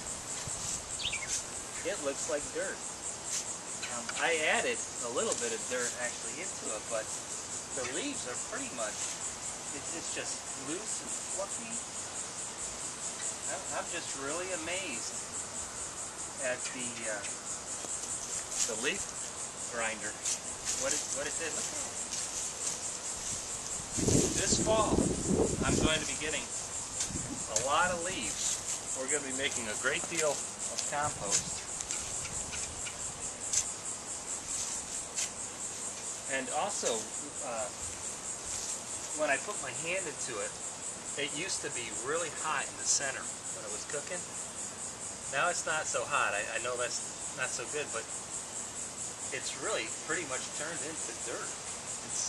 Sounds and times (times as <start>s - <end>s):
Cricket: 0.0s - 52.2s
Chirp, tweet: 1.0s - 1.3s.